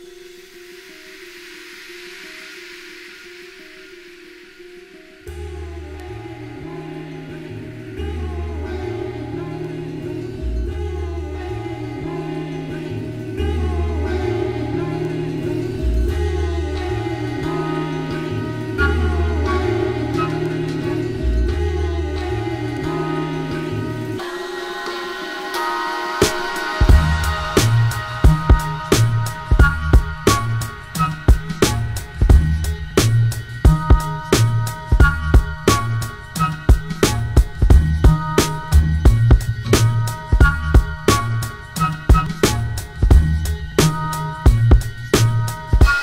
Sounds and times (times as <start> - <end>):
Music: 0.0 - 46.0.